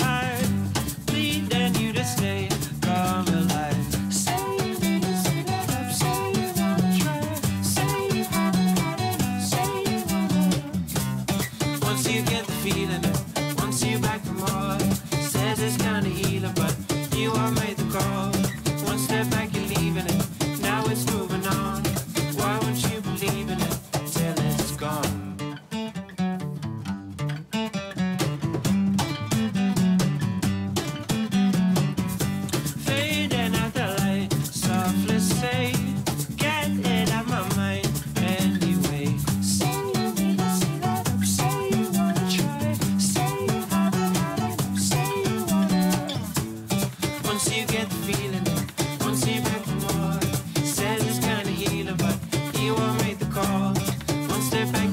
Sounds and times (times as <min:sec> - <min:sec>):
Music: 0:00.0 - 0:54.9.